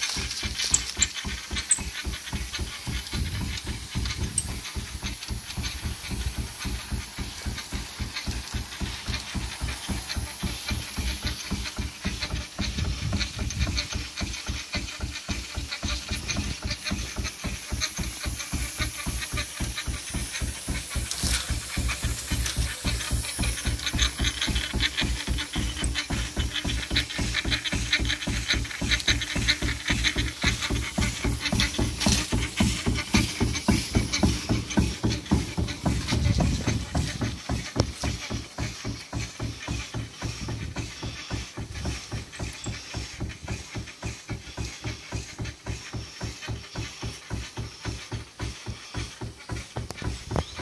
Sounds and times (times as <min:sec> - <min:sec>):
Idling: 0:00.0 - 0:50.6.